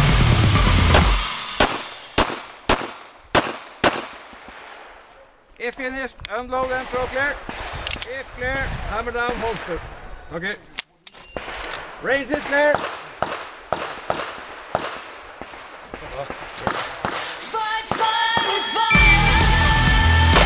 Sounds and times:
Outside, rural or natural: 0.0 - 20.4
Speech: 5.6 - 7.4, 8.1 - 10.8, 16.0 - 16.4.

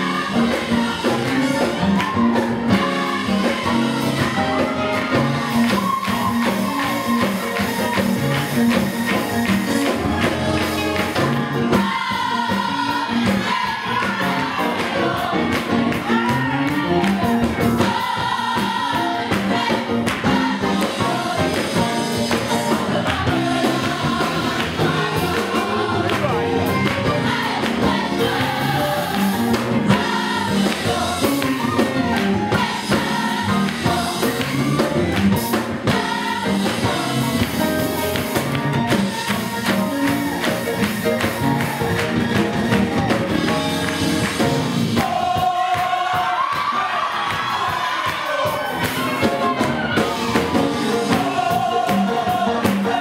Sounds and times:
Choir: 0.0 - 53.0.

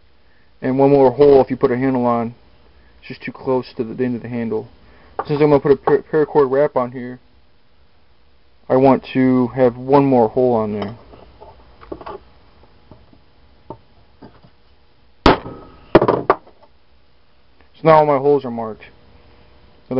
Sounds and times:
Speech: 0.6 - 2.4, 3.0 - 7.2, 8.7 - 11.0, 17.8 - 19.0.

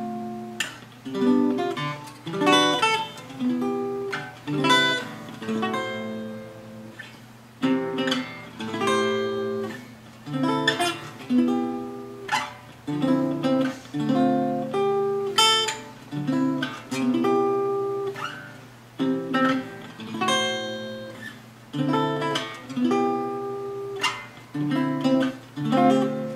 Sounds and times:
Music: 0.0 - 26.3.

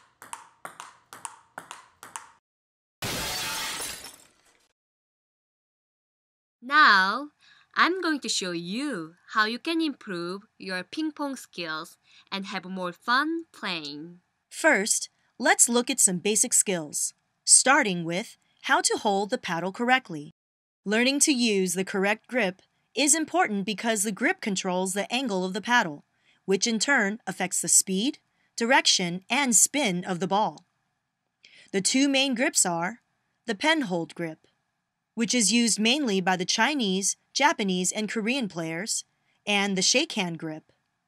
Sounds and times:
Speech: 6.6 - 20.3, 20.9 - 30.6, 31.6 - 34.4, 35.2 - 40.6.

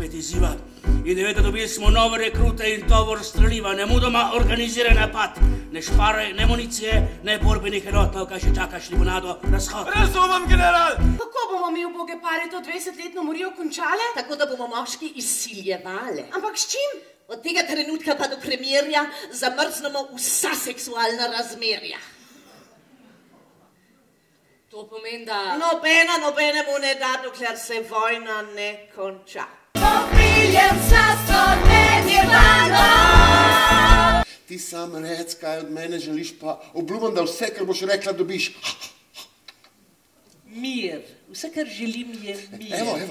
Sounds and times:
Speech: 0.0 - 22.0.

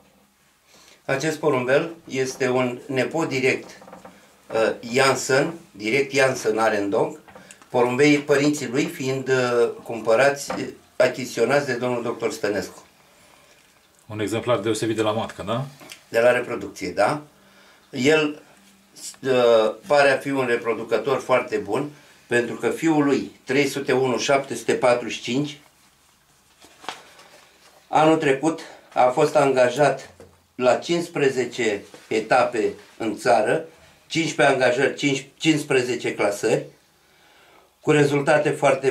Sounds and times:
Inside, small room: 0.0 - 38.9
Speech: 1.1 - 3.8, 4.5 - 12.9, 14.1 - 17.3, 17.9 - 25.7, 27.9 - 36.8, 37.8 - 38.9.

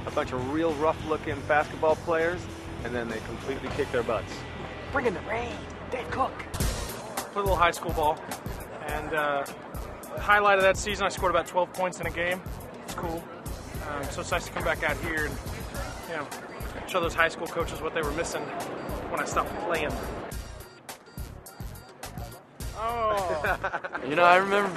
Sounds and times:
Music: 0.0 - 24.7
Speech: 10.2 - 18.5.

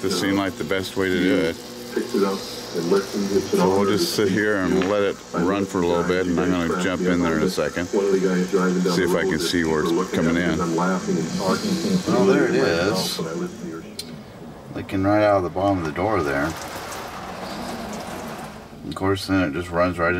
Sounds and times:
Speech: 0.0 - 13.9, 14.7 - 16.6, 18.8 - 20.1.

